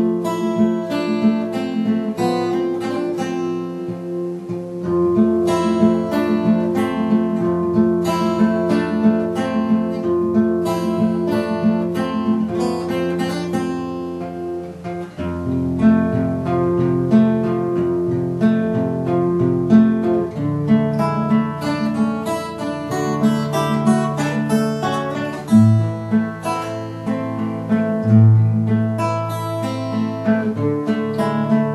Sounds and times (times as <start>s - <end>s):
Strum: 0.0s - 31.7s.